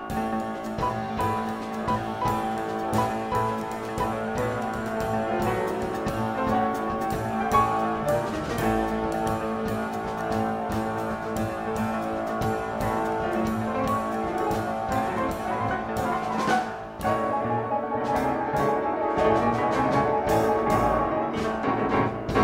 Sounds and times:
Jazz: 0.0 - 22.4.

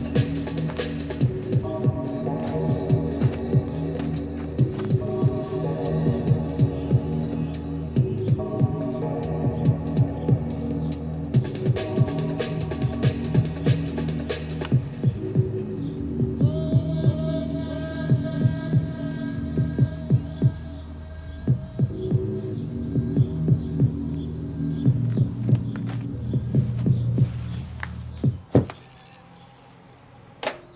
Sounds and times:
Music: 0.0 - 30.7.

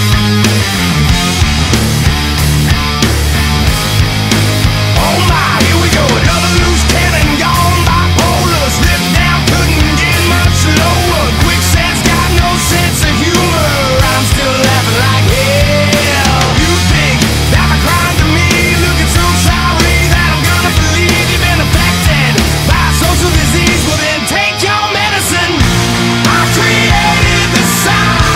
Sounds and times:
Music: 0.0 - 28.3.

